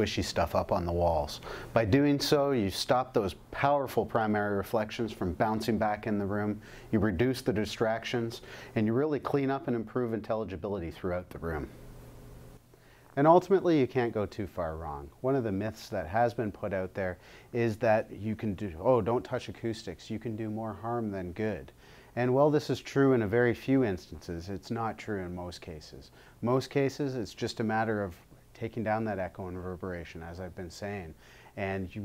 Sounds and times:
Speech: 0:00.0 - 0:11.8, 0:13.2 - 0:32.0.

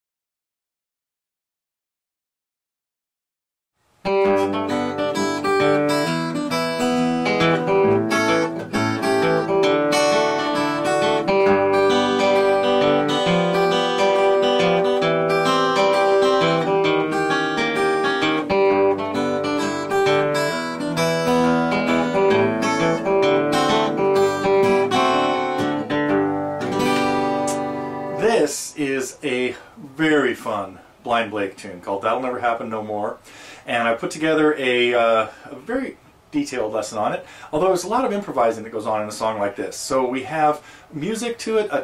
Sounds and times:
Acoustic guitar: 0:04.0 - 0:41.8
Strum: 0:04.1 - 0:30.5
Speech: 0:28.2 - 0:41.8.

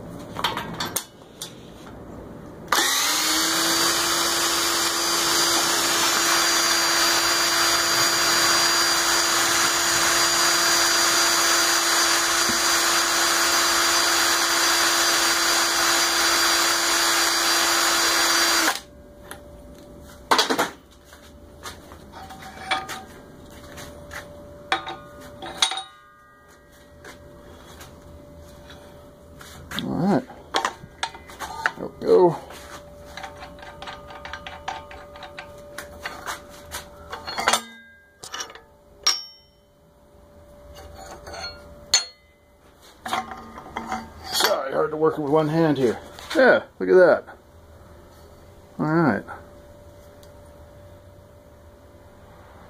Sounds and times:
Speech: 0:29.8 - 0:30.3, 0:31.5 - 0:32.5, 0:44.4 - 0:47.4, 0:48.8 - 0:49.4.

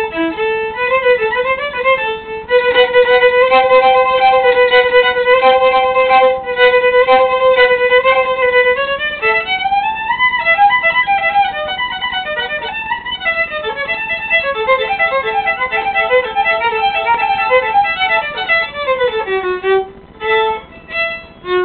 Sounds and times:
Violin, fiddle: 0:00.0 - 0:21.6.

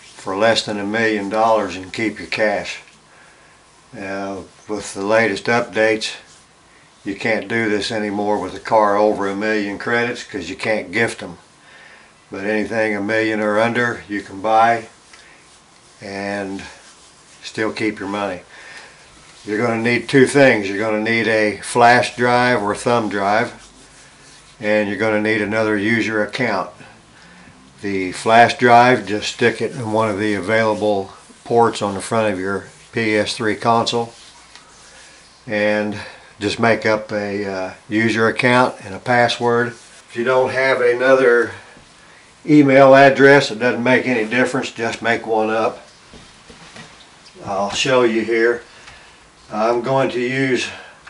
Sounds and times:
Speech: 0:00.2 - 0:02.9, 0:04.0 - 0:06.3, 0:07.0 - 0:11.4, 0:12.3 - 0:15.0, 0:16.0 - 0:18.5, 0:19.4 - 0:23.7, 0:24.6 - 0:26.9, 0:27.8 - 0:34.2, 0:35.5 - 0:41.7, 0:42.4 - 0:45.9, 0:47.4 - 0:48.7, 0:49.5 - 0:50.9.

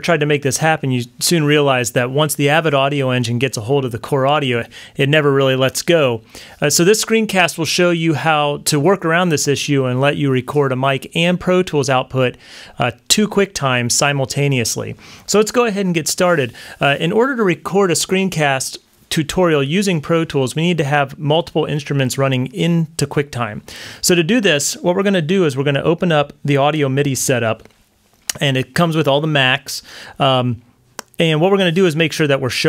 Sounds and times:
Speech: 0:00.0 - 0:27.7, 0:28.3 - 0:30.6, 0:31.2 - 0:32.6.

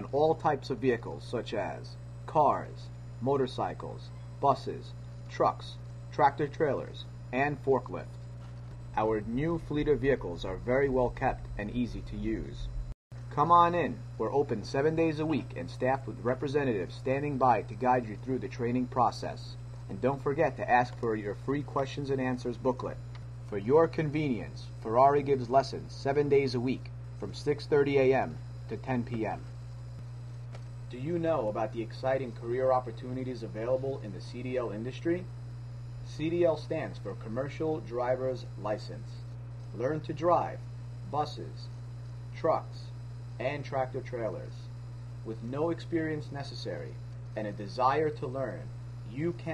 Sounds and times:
Speech: 0:00.0 - 0:08.2, 0:09.0 - 0:12.7, 0:13.3 - 0:29.6, 0:30.9 - 0:35.3, 0:36.0 - 0:49.5.

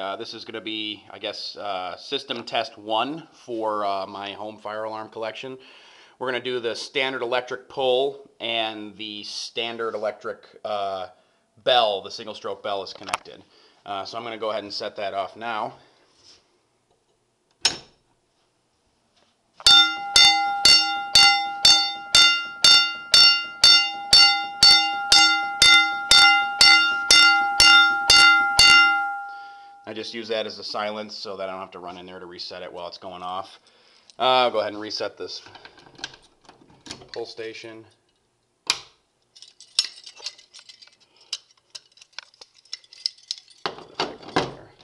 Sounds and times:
Speech: 0:00.0 - 0:05.6, 0:06.2 - 0:15.8, 0:29.9 - 0:33.6, 0:34.2 - 0:35.6, 0:37.0 - 0:38.0.

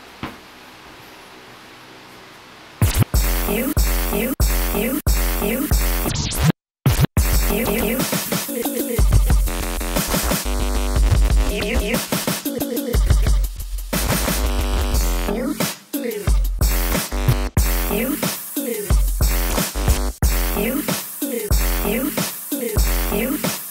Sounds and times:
Hip hop music: 0:02.8 - 0:06.2, 0:07.2 - 0:23.7
House music: 0:02.8 - 0:06.2, 0:07.2 - 0:23.7
Scratching (performance technique): 0:02.8 - 0:23.7.

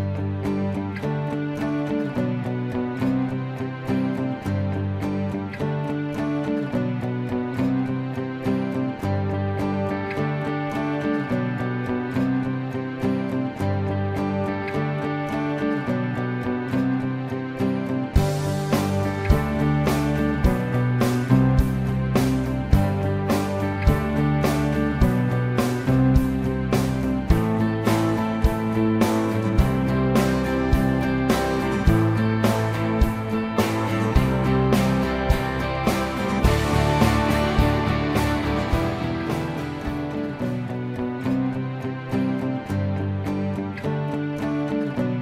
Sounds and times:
Music: 0:00.0 - 0:45.2.

